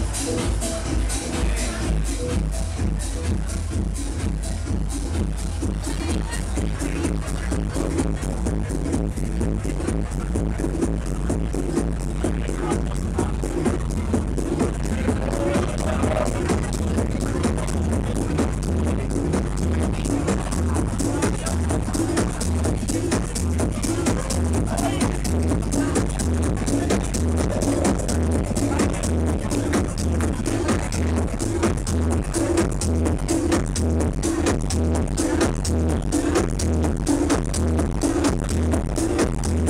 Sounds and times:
House music: 0.0 - 39.6
Speech: 0.0 - 39.6.

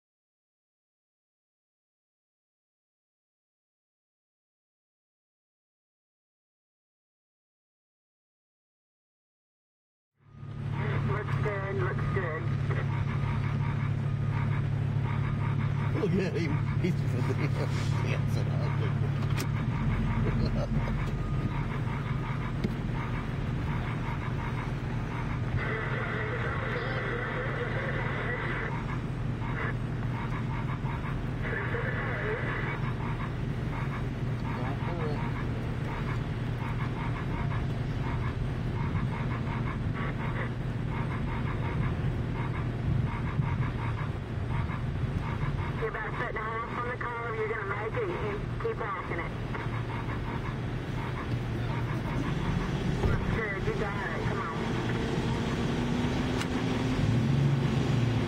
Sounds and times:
Vehicle: 10.2 - 58.2
Speech: 10.8 - 12.9, 16.0 - 19.0, 34.6 - 35.3, 45.8 - 49.4, 53.0 - 54.7.

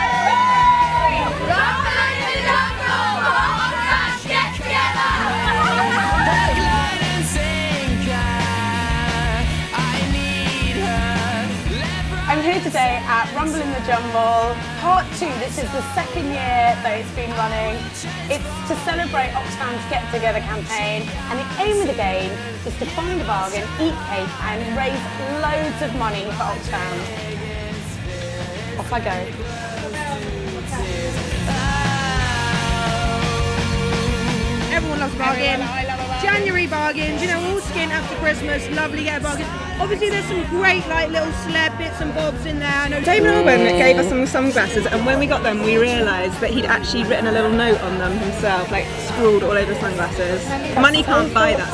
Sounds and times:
Music: 0.0 - 51.7.

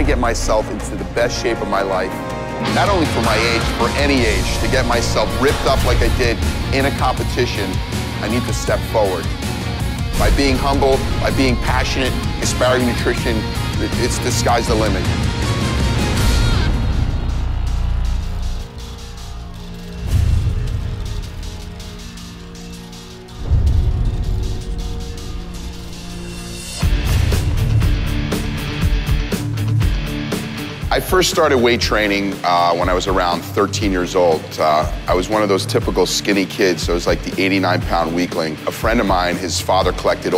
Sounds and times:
Speech: 0.0 - 9.3, 10.2 - 15.1, 30.9 - 40.3
Music: 0.0 - 40.3.

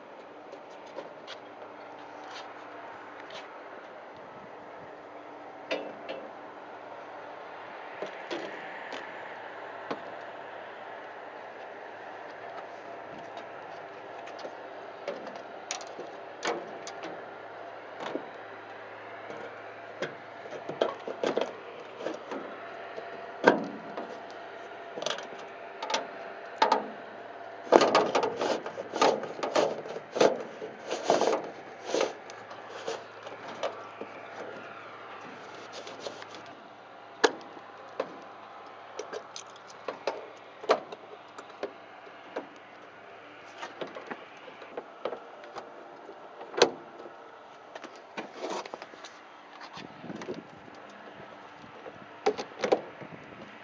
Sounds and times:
Aircraft: 0.0 - 53.6.

